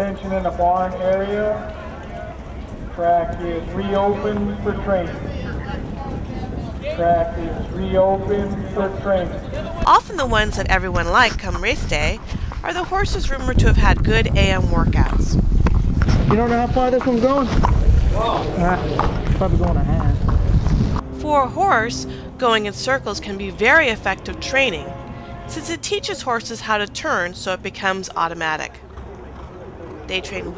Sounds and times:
Speech: 3.0 - 15.4.

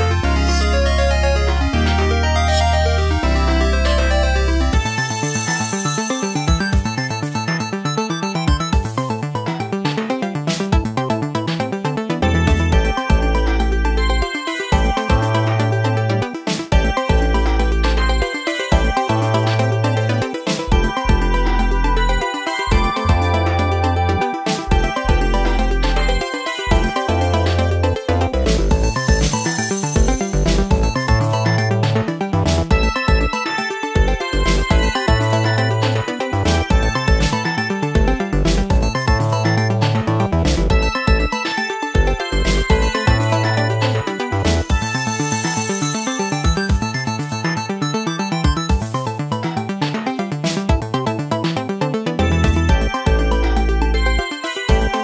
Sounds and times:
Music: 0.0 - 55.0.

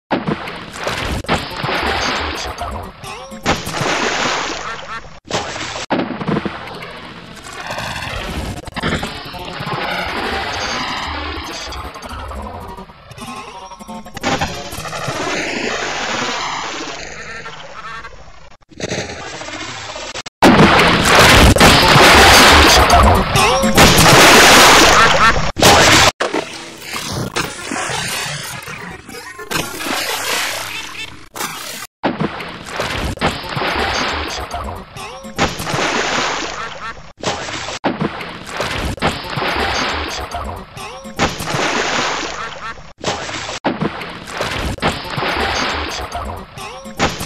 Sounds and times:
Sound effect: 0.1 - 47.2.

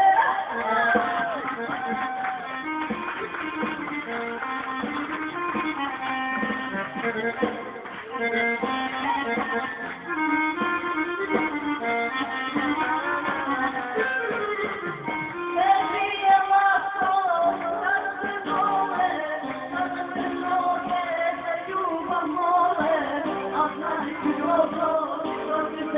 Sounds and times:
Singing: 15.6 - 25.9.

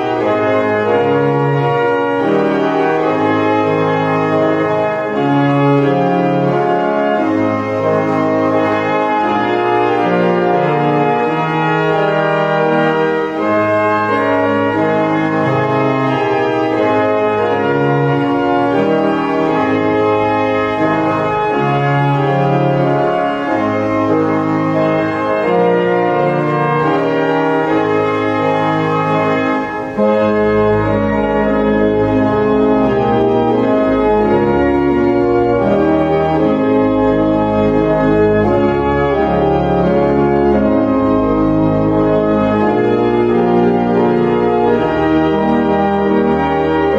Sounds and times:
Piano: 0.0 - 46.9.

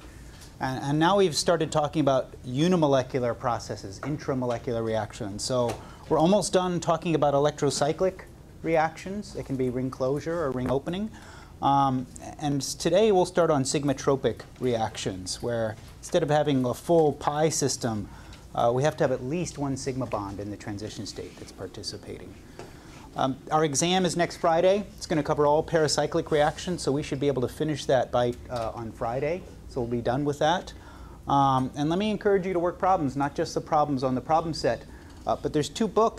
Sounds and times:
Speech: 0.6 - 22.4, 23.2 - 36.1.

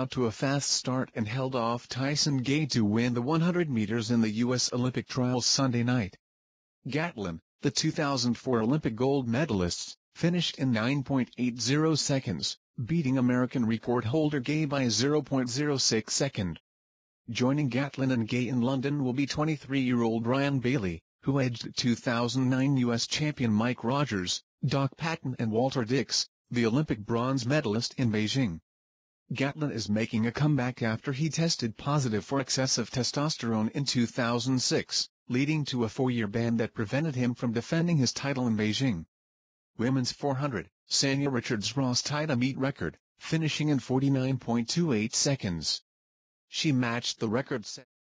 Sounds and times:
Speech: 0.0 - 6.2, 6.9 - 16.6, 17.3 - 28.6, 29.3 - 39.1, 39.8 - 45.9, 46.5 - 47.9.

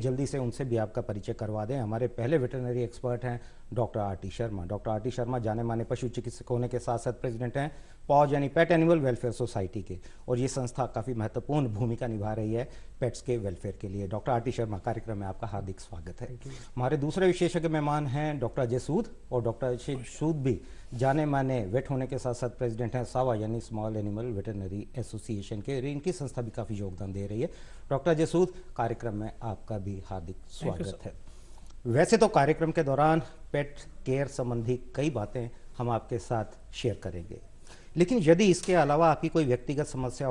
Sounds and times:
Speech: 0.0 - 31.2, 31.9 - 40.3.

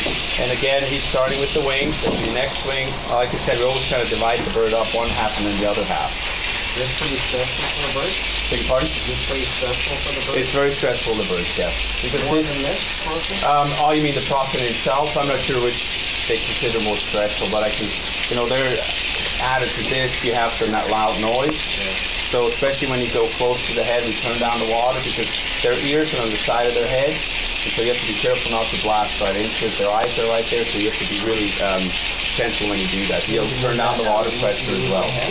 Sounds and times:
Speech: 0.4 - 6.2, 6.8 - 35.3.

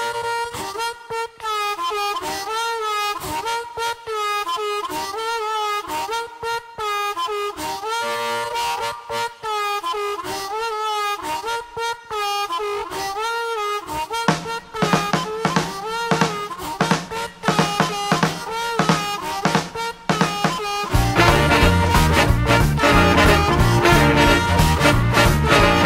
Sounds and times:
Music: 0.0 - 25.8.

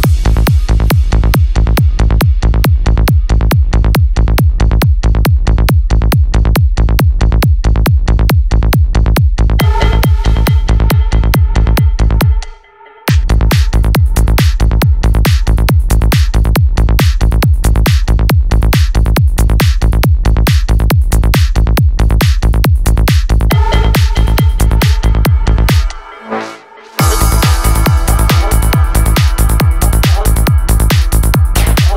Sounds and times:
Music: 0.0 - 31.9.

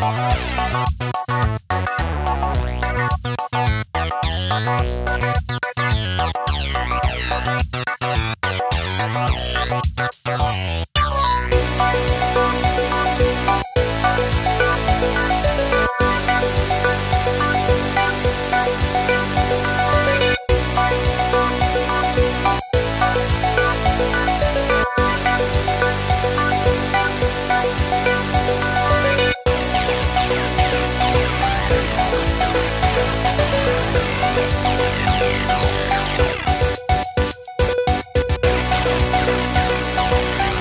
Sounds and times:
Music: 0.0 - 40.6.

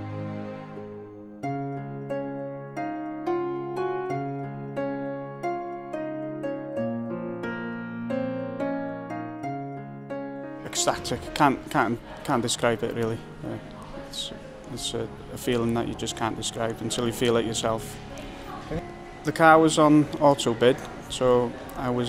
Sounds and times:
Music: 0.0 - 22.0.

